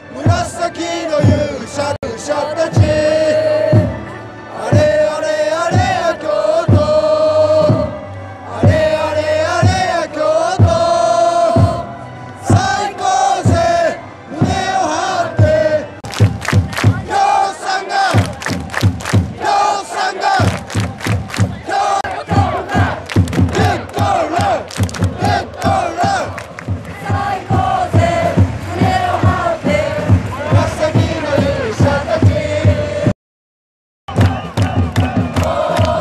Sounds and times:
Music: 0.0s - 33.2s, 34.1s - 36.0s.

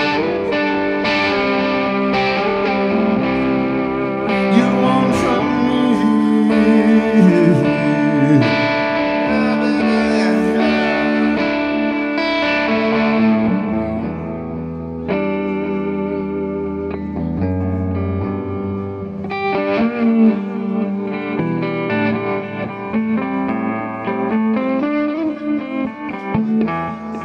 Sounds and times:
Distortion: 0.0s - 27.2s
Guitar: 0.0s - 27.2s
Singing: 4.0s - 12.0s.

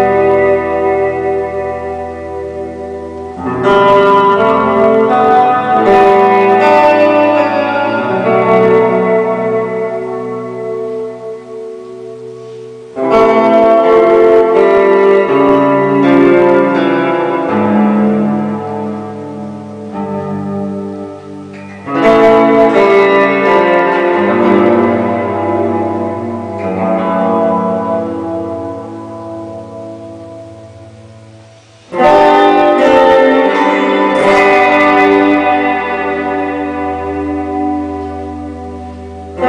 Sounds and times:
Guitar: 0.0s - 39.4s.

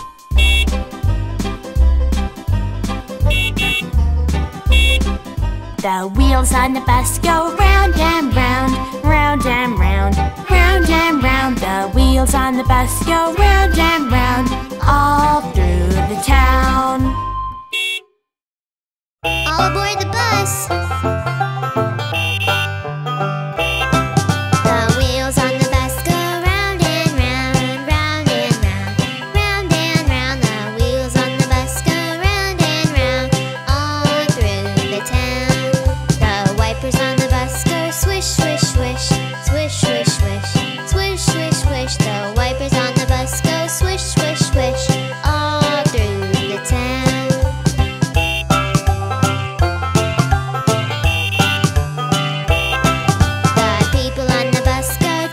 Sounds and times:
Music: 0.0s - 17.6s, 19.2s - 55.3s
Outside, urban or manmade: 0.0s - 18.4s, 19.2s - 55.3s.

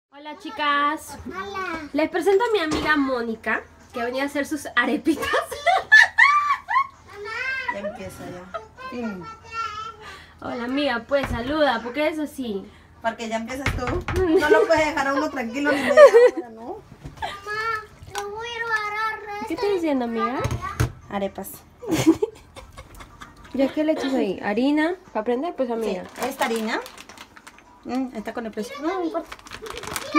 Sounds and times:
Inside, small room: 0.1s - 30.1s
Belly laugh: 5.3s - 7.0s, 14.4s - 16.5s, 21.8s - 24.0s.

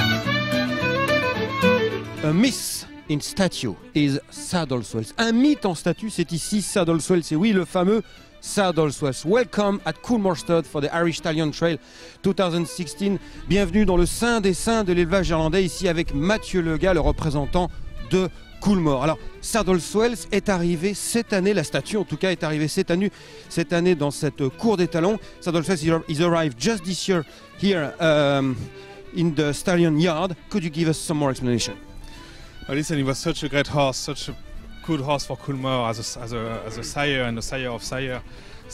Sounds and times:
Music: 0.0s - 38.7s
Speech: 2.2s - 31.8s, 32.7s - 38.2s.

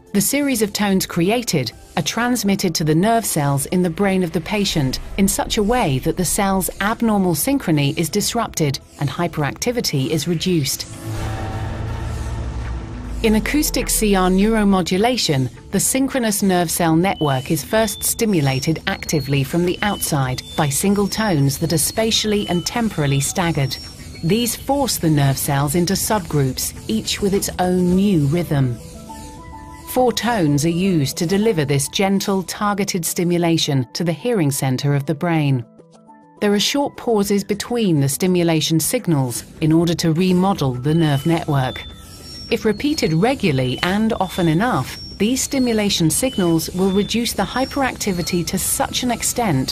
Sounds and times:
Music: 0.0s - 49.7s
Speech: 0.1s - 10.9s, 13.2s - 28.8s, 29.9s - 35.7s, 36.4s - 41.8s, 42.5s - 49.7s.

